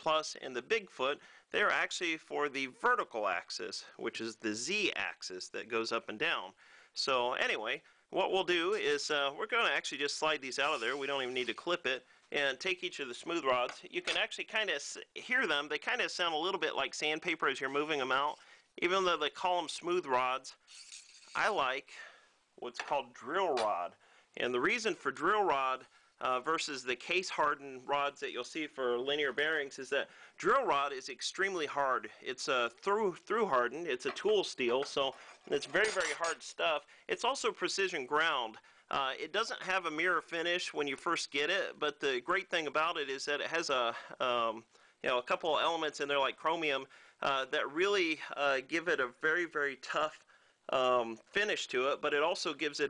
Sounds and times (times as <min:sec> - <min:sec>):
Speech: 0:00.0 - 0:20.6, 0:21.4 - 0:52.8.